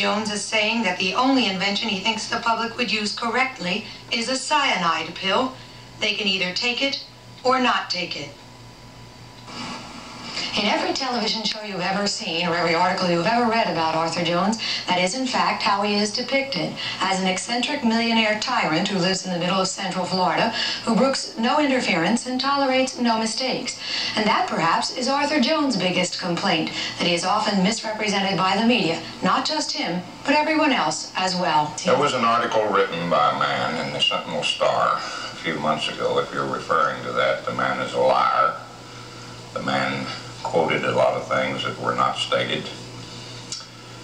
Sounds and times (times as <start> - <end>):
Speech: 0.0 - 8.4, 10.4 - 38.6, 39.6 - 42.8.